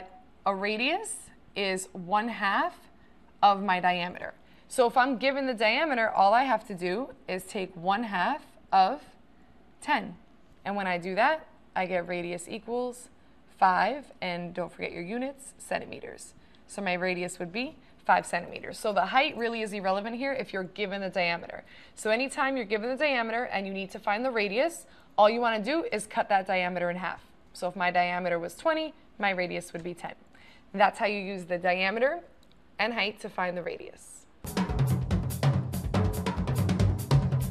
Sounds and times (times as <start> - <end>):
Speech: 0.0 - 9.2, 9.8 - 30.2, 30.8 - 34.3
Music: 34.4 - 37.5.